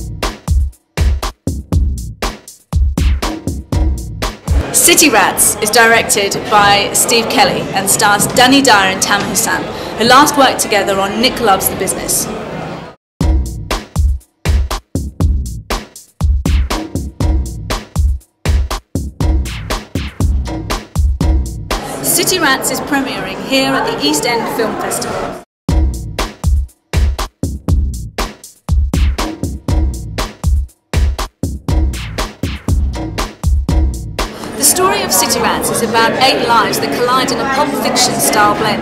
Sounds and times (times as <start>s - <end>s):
Music: 0.0s - 9.6s, 13.2s - 22.9s, 25.7s - 38.8s
Speech: 4.6s - 12.4s, 21.9s - 25.4s, 34.5s - 38.8s.